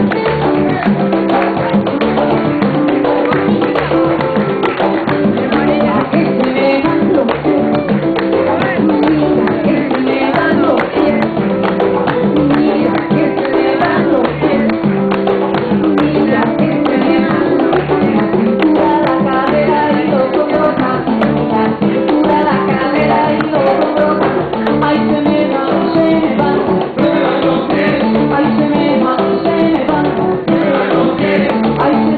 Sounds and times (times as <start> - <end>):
Music: 0.0 - 32.1
Singing: 5.1 - 7.7, 8.3 - 15.1, 15.7 - 32.1.